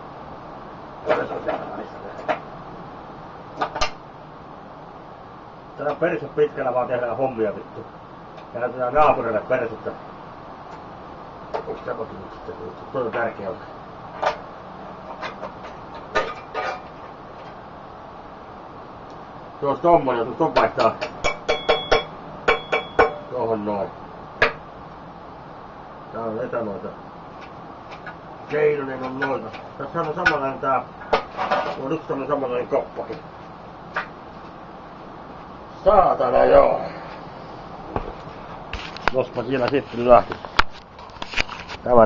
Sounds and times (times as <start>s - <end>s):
Speech: 1.1s - 2.3s, 5.8s - 7.9s, 8.5s - 10.0s, 11.6s - 13.7s, 19.6s - 21.0s, 23.3s - 24.0s, 26.1s - 27.0s, 28.5s - 30.9s, 31.7s - 33.2s, 35.8s - 37.0s, 39.1s - 40.4s, 41.8s - 42.0s.